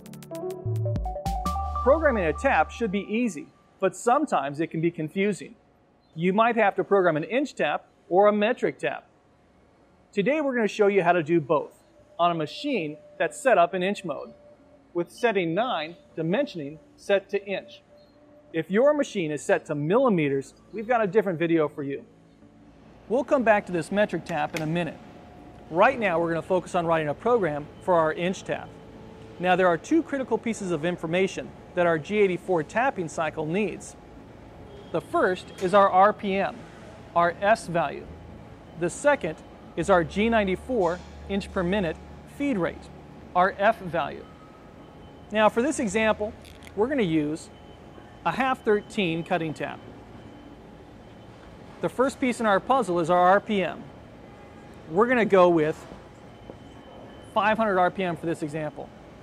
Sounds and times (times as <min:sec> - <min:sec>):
Speech: 0:01.8 - 0:05.6, 0:06.2 - 0:09.1, 0:10.2 - 0:14.3, 0:15.0 - 0:17.8, 0:18.6 - 0:22.0, 0:23.1 - 0:25.0, 0:25.7 - 0:28.7, 0:29.4 - 0:34.0, 0:35.0 - 0:36.6, 0:37.2 - 0:38.1, 0:38.8 - 0:44.2, 0:45.3 - 0:47.5, 0:48.3 - 0:49.8, 0:51.8 - 0:53.9, 0:54.9 - 0:55.8, 0:57.4 - 0:58.9.